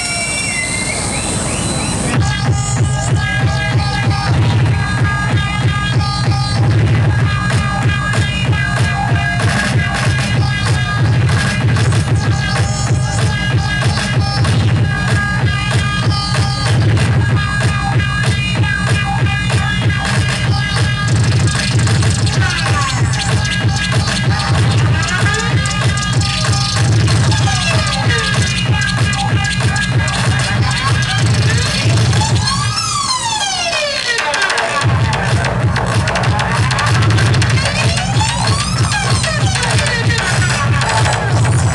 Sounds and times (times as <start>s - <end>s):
Music: 0.0s - 41.7s.